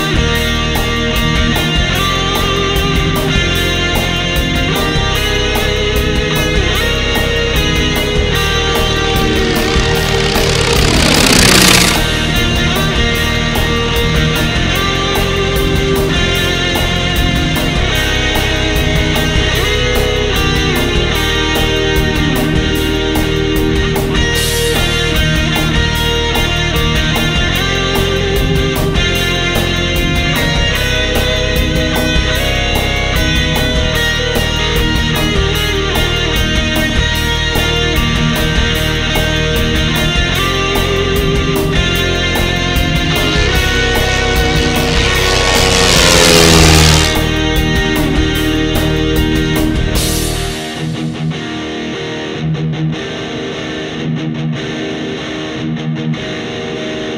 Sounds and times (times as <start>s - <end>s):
Propeller, airscrew: 0.0s - 51.2s
Heavy metal: 8.0s - 13.4s, 42.8s - 47.7s.